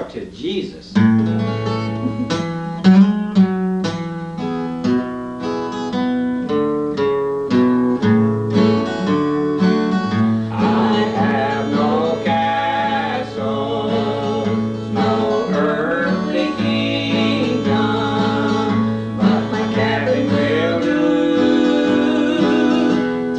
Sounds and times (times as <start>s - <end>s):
Bluegrass: 0.0s - 23.3s.